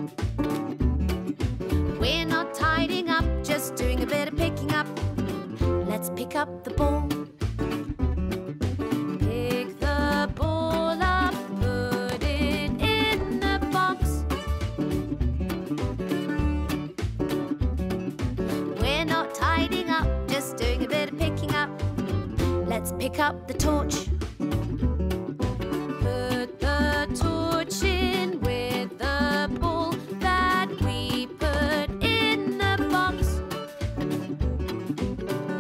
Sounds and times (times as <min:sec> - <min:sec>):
Music: 0:00.0 - 0:35.6.